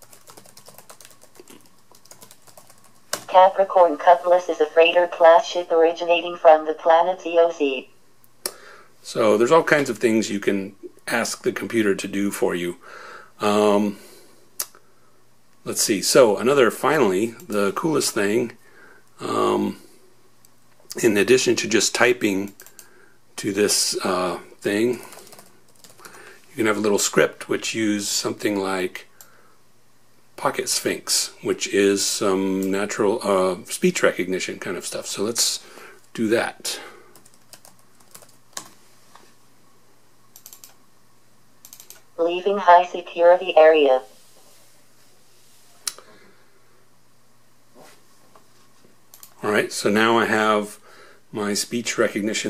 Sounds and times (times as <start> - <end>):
Inside, small room: 0.0 - 52.4
Speech: 3.3 - 7.9, 9.0 - 12.8, 13.4 - 14.0, 15.6 - 18.6, 19.2 - 19.8, 20.9 - 22.6, 23.4 - 25.1, 26.6 - 29.1, 30.4 - 35.6, 36.2 - 36.9, 42.2 - 44.1, 49.4 - 52.4.